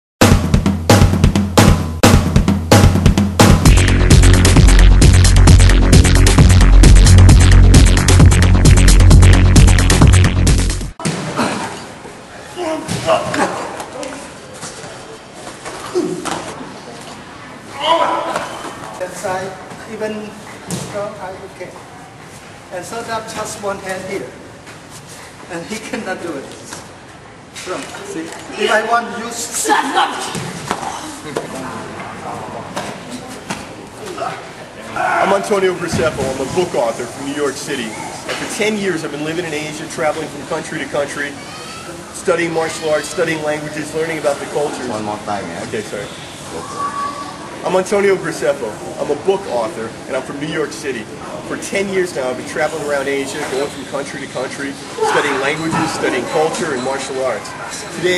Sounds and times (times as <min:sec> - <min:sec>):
Drum kit: 0:00.2 - 0:11.2
Drum roll: 0:00.2 - 0:11.4.